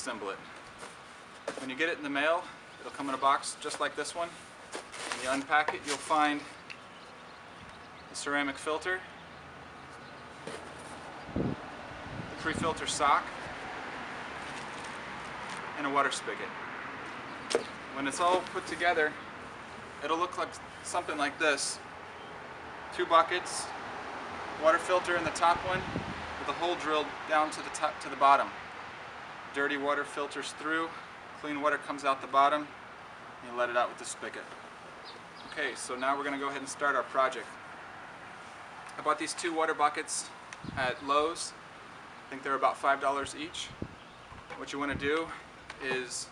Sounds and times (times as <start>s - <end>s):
Speech: 0.0s - 0.4s, 1.6s - 4.4s, 5.2s - 6.5s, 8.2s - 9.1s, 12.4s - 13.3s, 15.8s - 16.5s, 18.0s - 19.2s, 20.0s - 21.8s, 23.0s - 23.7s, 24.6s - 25.8s, 26.4s - 28.6s, 29.6s - 32.7s, 33.4s - 34.5s, 35.5s - 37.5s, 39.0s - 41.6s, 42.3s - 43.8s, 44.6s - 46.3s.